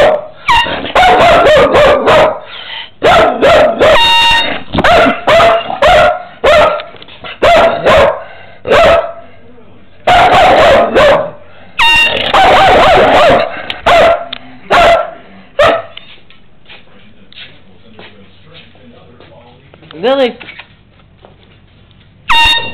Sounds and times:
Bow-wow: 0.0s - 9.2s, 10.1s - 16.0s
Yip: 0.0s - 9.2s, 10.1s - 16.1s.

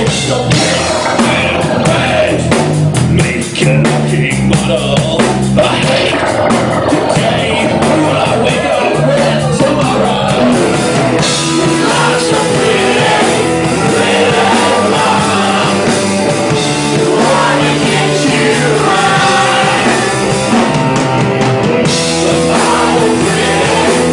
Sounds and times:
Rock and roll: 0.0s - 24.1s.

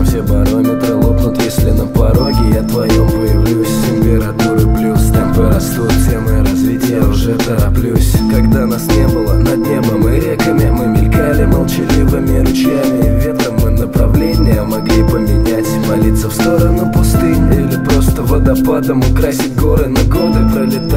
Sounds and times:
Music: 0.0s - 20.9s.

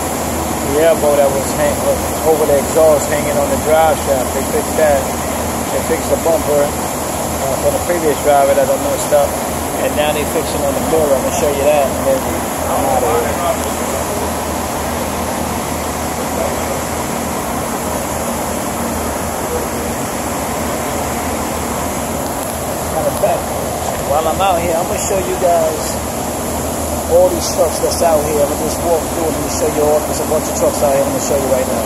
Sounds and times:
Speech: 0.6s - 5.1s, 5.7s - 6.8s, 7.4s - 14.4s, 16.2s - 16.7s, 22.9s - 26.0s, 27.1s - 31.8s.

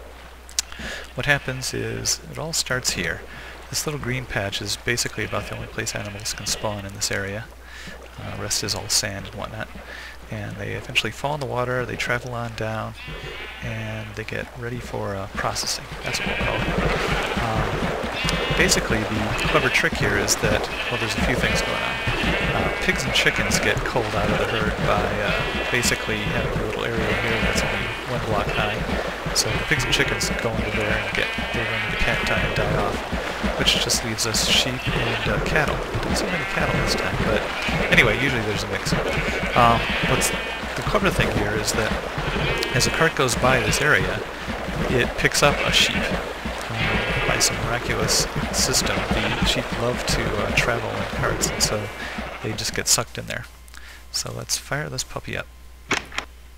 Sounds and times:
Speech: 0.6s - 53.5s, 54.1s - 55.5s
Bleat: 5.1s - 7.0s, 13.0s - 14.2s, 16.0s - 44.3s, 44.9s - 52.8s.

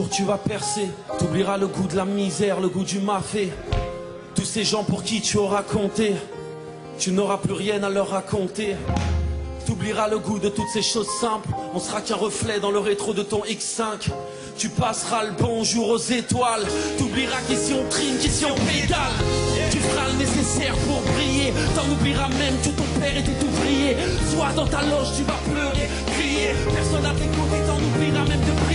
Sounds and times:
Music: 0.0s - 28.7s.

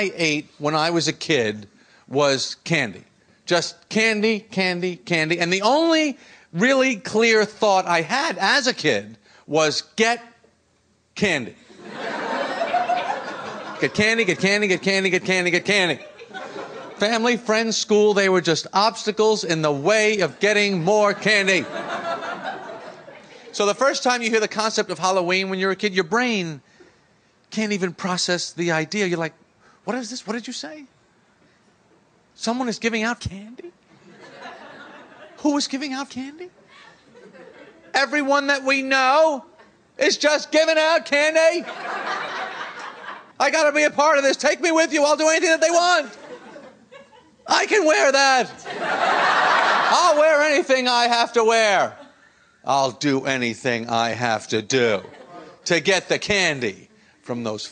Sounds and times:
Speech: 0.0s - 10.4s, 11.2s - 11.6s, 13.8s - 16.1s, 17.0s - 21.8s, 23.5s - 26.6s, 27.5s - 30.9s, 32.4s - 33.8s, 35.4s - 36.6s, 37.9s - 41.7s, 43.4s - 46.2s, 47.5s - 48.6s, 49.8s - 52.0s, 52.7s - 57.7s
Laughter: 11.7s - 14.9s, 15.9s - 17.1s, 21.0s - 23.6s, 33.9s - 35.4s, 36.6s - 38.0s, 41.5s - 43.4s, 46.1s - 47.5s, 48.5s - 50.4s, 51.9s - 52.4s, 54.9s - 55.7s.

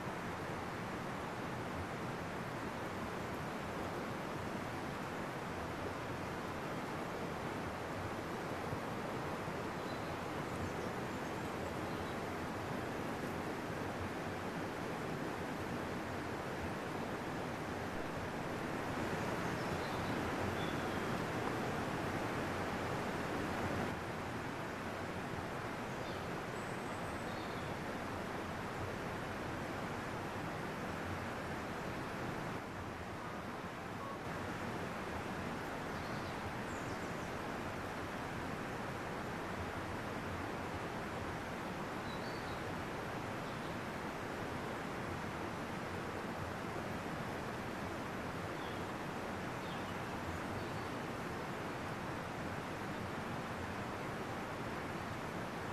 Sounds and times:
Outside, rural or natural: 0.0s - 55.7s.

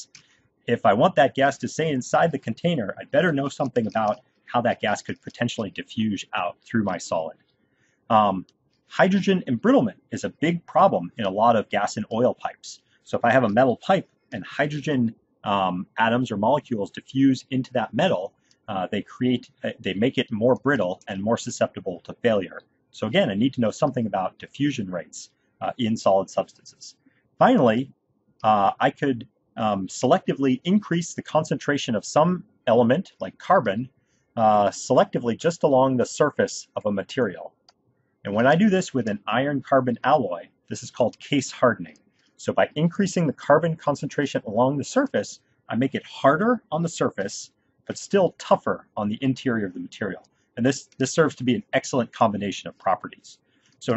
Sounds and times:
Speech: 0.0s - 7.4s, 8.1s - 37.6s, 38.2s - 53.9s.

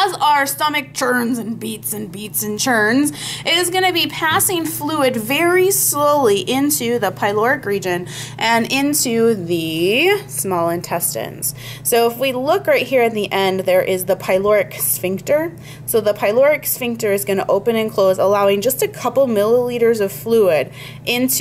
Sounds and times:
Speech: 0.0s - 21.4s.

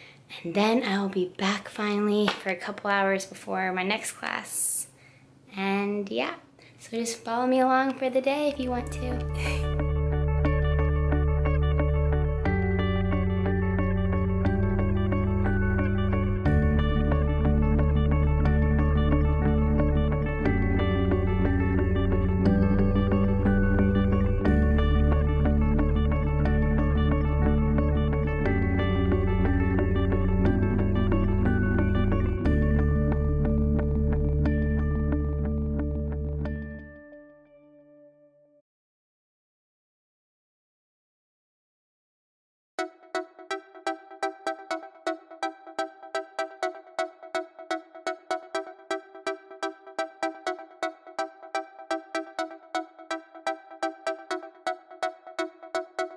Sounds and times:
Speech: 0.3s - 4.9s, 5.5s - 9.6s
Music: 7.9s - 38.6s, 42.8s - 56.1s.

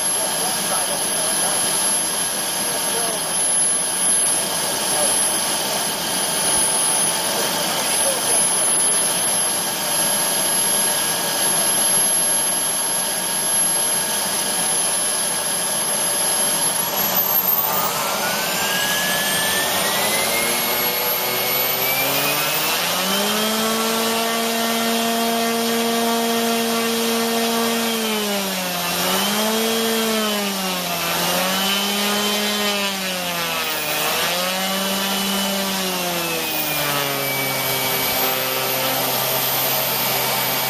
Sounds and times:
Vacuum cleaner: 0.0s - 40.6s.

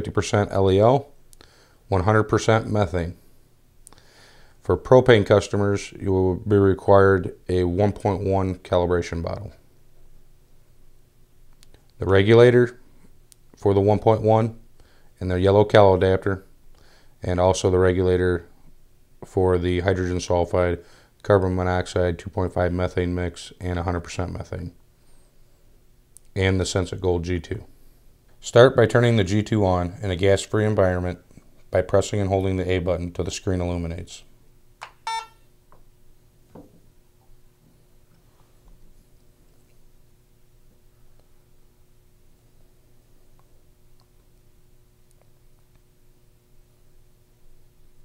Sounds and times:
Speech: 0.0s - 1.2s, 1.9s - 3.2s, 4.6s - 9.6s, 12.0s - 12.8s, 13.6s - 14.6s, 15.2s - 16.5s, 17.2s - 18.6s, 19.2s - 24.8s, 26.3s - 27.7s, 28.4s - 34.3s.

